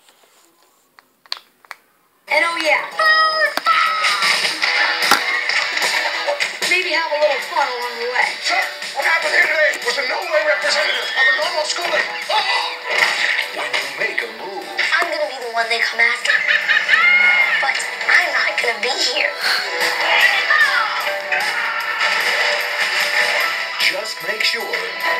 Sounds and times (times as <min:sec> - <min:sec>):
Music: 0:02.3 - 0:25.1.